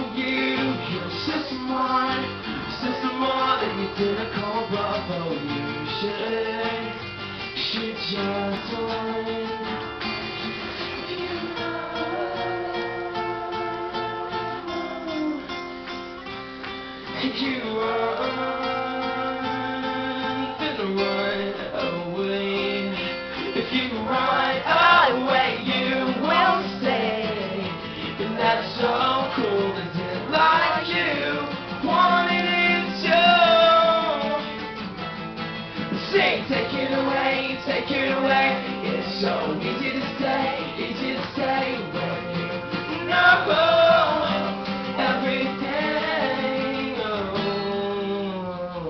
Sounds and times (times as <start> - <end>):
Music: 0.0 - 48.9.